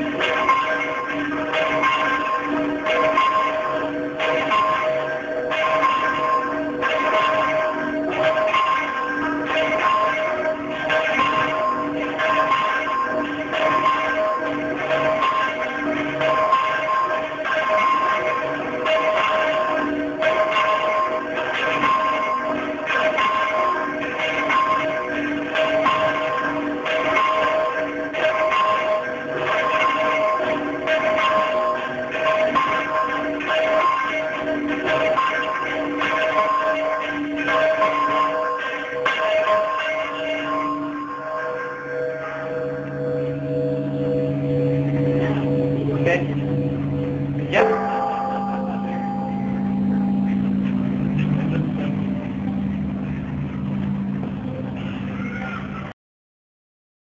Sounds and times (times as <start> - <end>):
Bell: 0.0 - 56.0
Speech: 45.2 - 46.4, 51.2 - 52.6, 54.4 - 55.9.